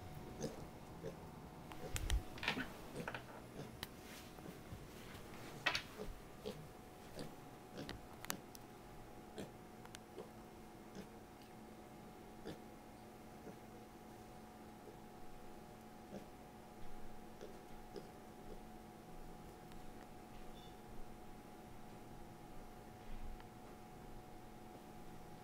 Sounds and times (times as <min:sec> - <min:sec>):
Oink: 0:00.4 - 0:01.2, 0:06.4 - 0:06.6, 0:07.2 - 0:08.0, 0:09.4 - 0:09.6, 0:10.9 - 0:11.2, 0:12.4 - 0:12.6, 0:13.4 - 0:13.6, 0:16.1 - 0:16.4, 0:17.4 - 0:18.2.